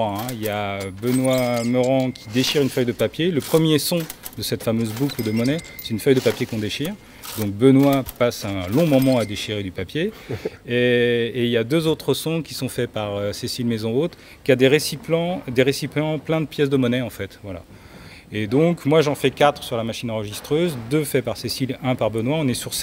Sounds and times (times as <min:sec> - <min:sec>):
Speech: 0:00.0 - 0:17.7, 0:18.3 - 0:22.8.